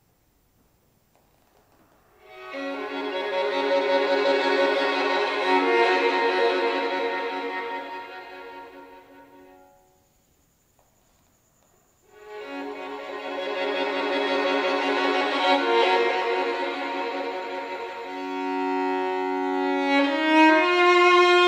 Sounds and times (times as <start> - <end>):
Violin, fiddle: 1.2 - 10.0, 12.1 - 21.4.